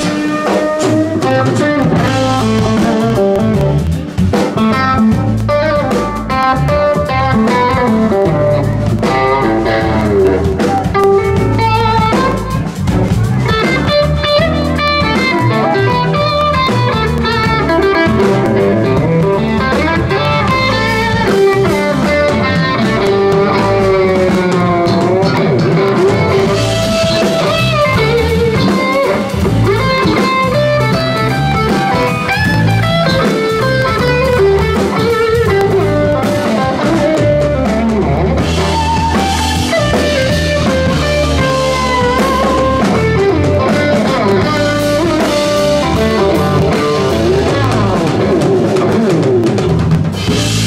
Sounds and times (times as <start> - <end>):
Electric guitar: 0.0 - 50.6.